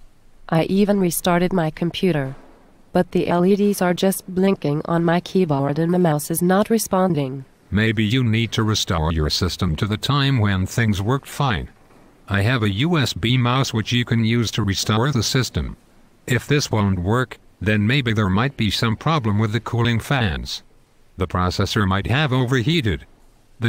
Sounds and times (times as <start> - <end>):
Speech: 0.5 - 2.4, 3.0 - 20.6, 21.2 - 23.6.